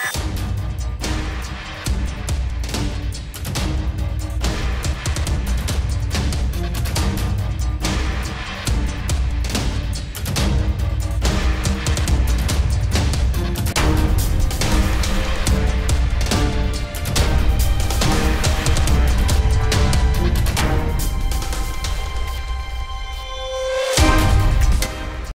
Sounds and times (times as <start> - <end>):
Music: 0.0 - 25.3.